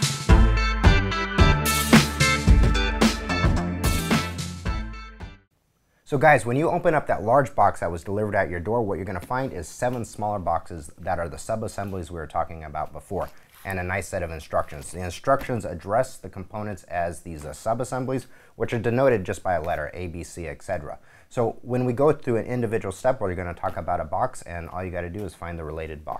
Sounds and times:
Speech: 6.1 - 26.1.

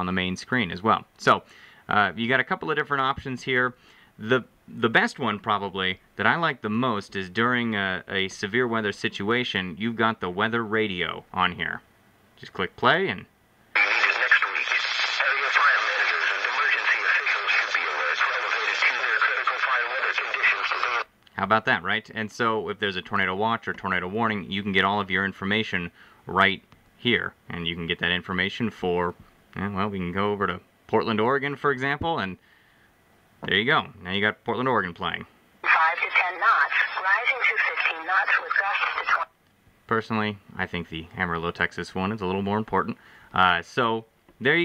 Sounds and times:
Speech: 0.0 - 11.8, 12.4 - 32.4, 33.4 - 39.3, 39.9 - 44.6
Radio: 13.8 - 21.1, 35.6 - 39.3.

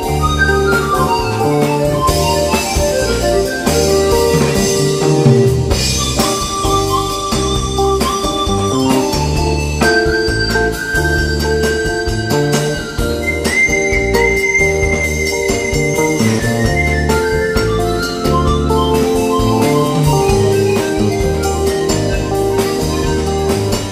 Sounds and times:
Double bass: 0.0 - 23.9
Percussion: 0.0 - 23.9.

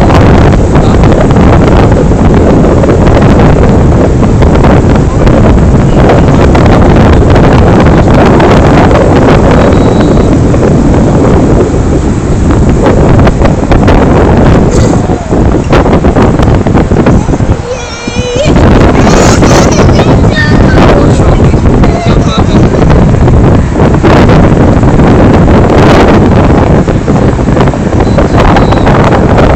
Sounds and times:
Speech: 17.2 - 22.8.

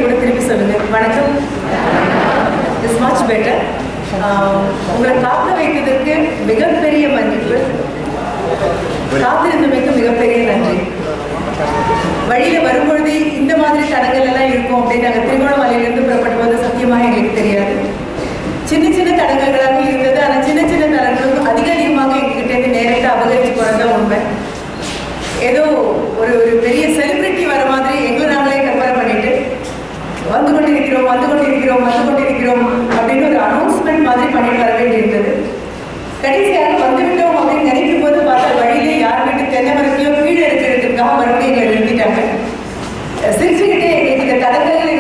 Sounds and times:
Female speech, woman speaking: 0.0 - 1.6, 2.7 - 7.8, 9.1 - 11.0, 12.3 - 18.0, 18.7 - 24.4, 25.4 - 29.6, 30.2 - 35.6, 36.2 - 42.5, 43.2 - 45.0
Narration, monologue: 0.0 - 45.0.

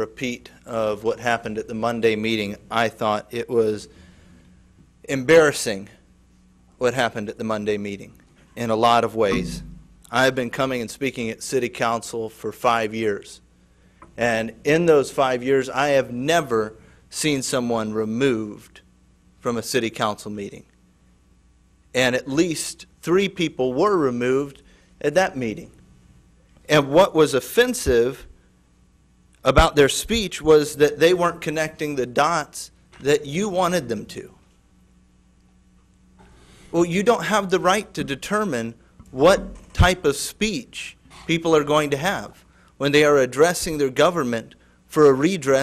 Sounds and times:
Male speech, man speaking: 0.0 - 3.9, 5.1 - 5.9, 6.8 - 13.4, 14.2 - 18.8, 19.4 - 20.6, 22.0 - 25.7, 26.7 - 28.3, 29.4 - 34.4, 36.8 - 45.6
Narration, monologue: 0.0 - 45.6.

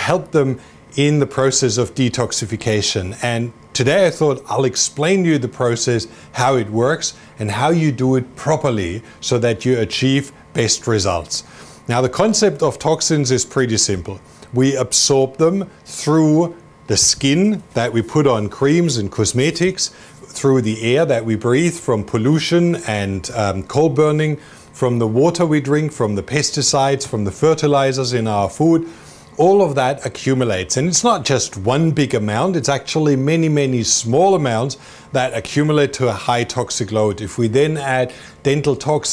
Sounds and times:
Speech: 0.0 - 39.1.

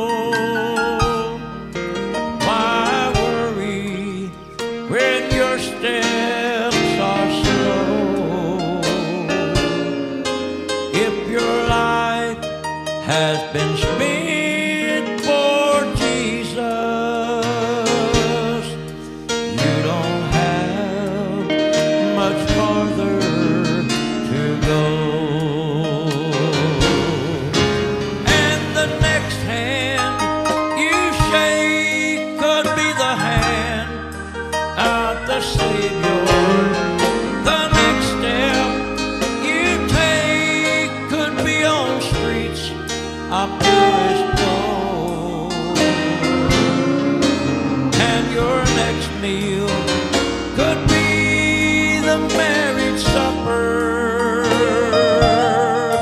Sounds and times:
Male singing: 0.0 - 1.4, 2.4 - 18.8, 19.5 - 34.1, 34.8 - 56.0
Music: 0.0 - 56.0.

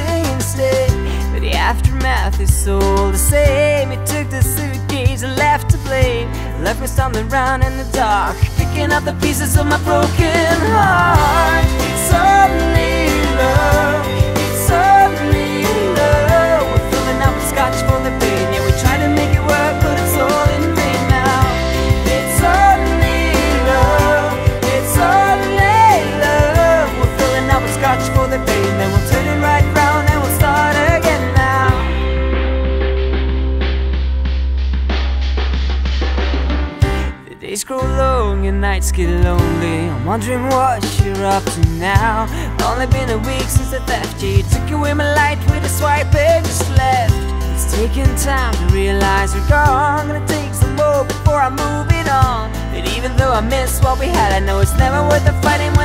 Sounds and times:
Tender music: 0.0 - 35.7, 36.3 - 55.8
Blues: 0.0 - 55.8.

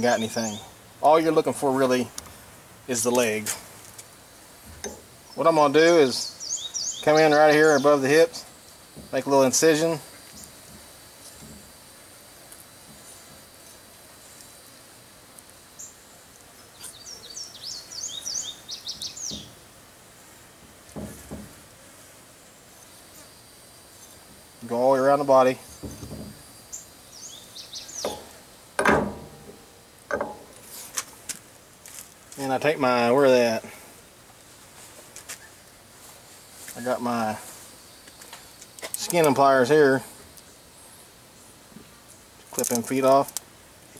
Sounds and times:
Speech: 0.0 - 2.1, 2.9 - 3.7, 5.4 - 6.4, 7.0 - 8.5, 9.1 - 10.1, 24.6 - 25.6, 32.4 - 33.8, 36.7 - 37.5, 39.0 - 40.1, 42.5 - 43.4
Environmental noise: 0.0 - 43.9.

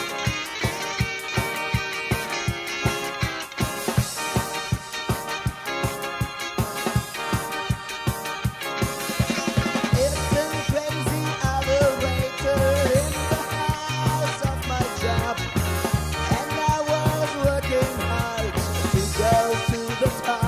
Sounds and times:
Ska: 0.0 - 20.4.

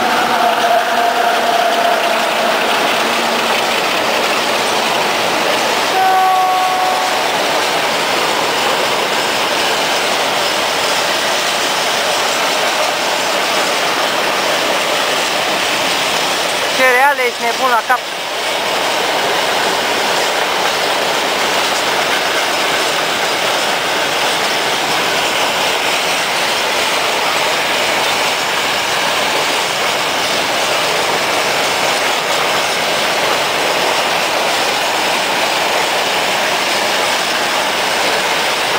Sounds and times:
Outside, urban or manmade: 0.0 - 38.7
Railroad car, train wagon: 0.0 - 38.7
Train: 0.0 - 38.7
Speech: 16.7 - 18.0.

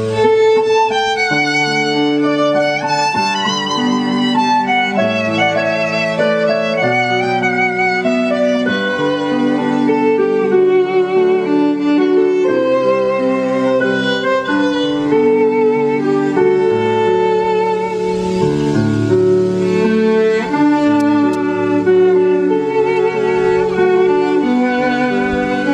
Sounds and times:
Violin, fiddle: 0.0 - 25.7.

